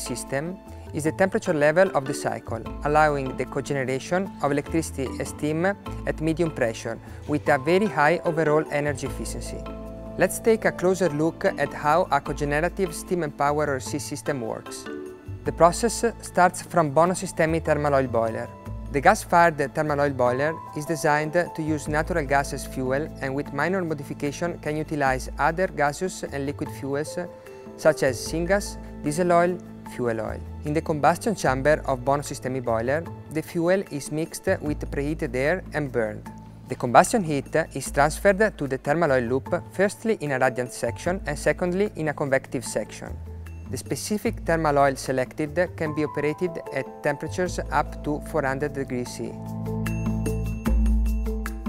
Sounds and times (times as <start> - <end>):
Speech: 0.0 - 9.6, 10.2 - 14.9, 15.5 - 49.4
Music: 0.0 - 51.6.